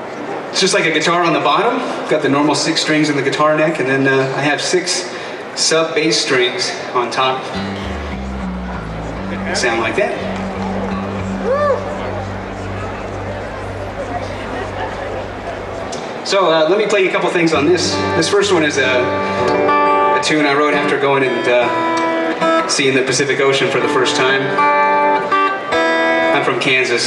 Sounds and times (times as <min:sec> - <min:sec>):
Speech: 0:00.0 - 0:07.6, 0:09.2 - 0:19.2, 0:20.2 - 0:21.8, 0:22.6 - 0:24.6, 0:26.3 - 0:27.0
Guitar: 0:07.2 - 0:27.0.